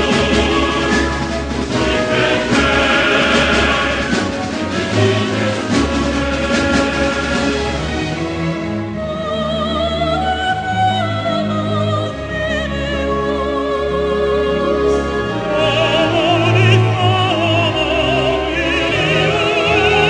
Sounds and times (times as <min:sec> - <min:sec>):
Music: 0:00.0 - 0:20.1.